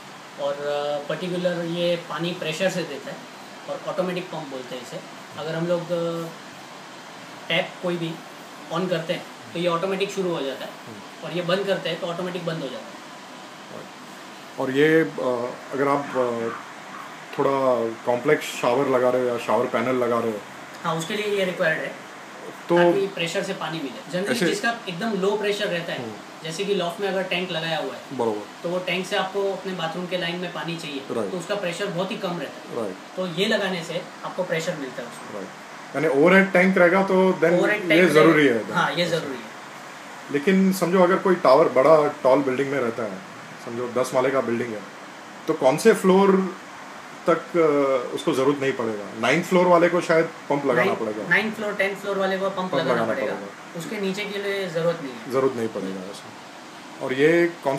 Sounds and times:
Speech: 0:14.6 - 0:16.6, 0:17.3 - 0:39.5, 0:40.3 - 0:44.9, 0:47.3 - 0:56.3, 0:57.0 - 0:57.7.

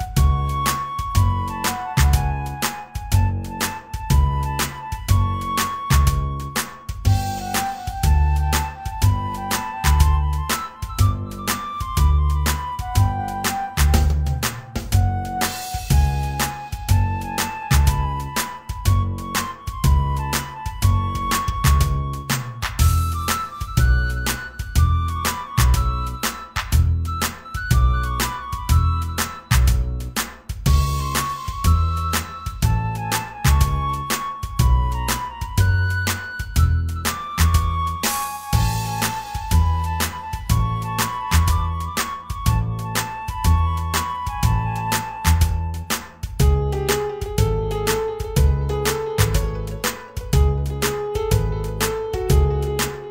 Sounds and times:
Music: 0:00.0 - 0:53.1.

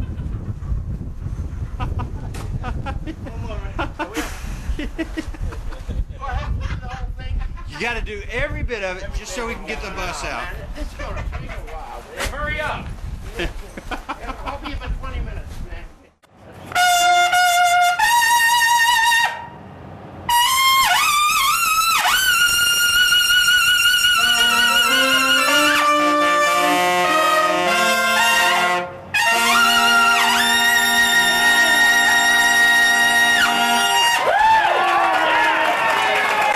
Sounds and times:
Speech: 0:06.1 - 0:13.5, 0:14.2 - 0:16.2
Trumpet: 0:16.7 - 0:19.6, 0:20.3 - 0:34.6.

